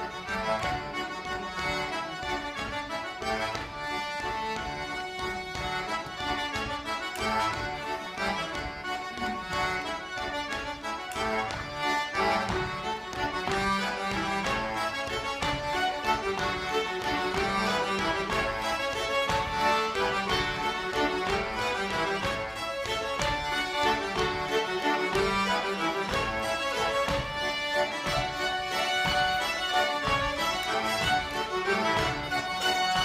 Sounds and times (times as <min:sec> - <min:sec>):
Violin, fiddle: 0:00.0 - 0:33.0.